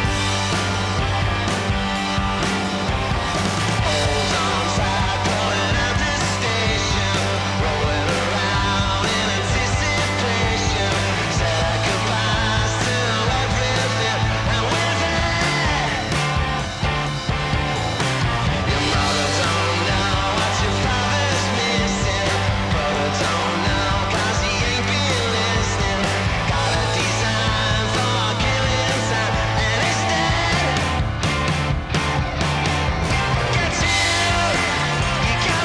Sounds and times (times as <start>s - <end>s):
Music: 0.0s - 35.6s.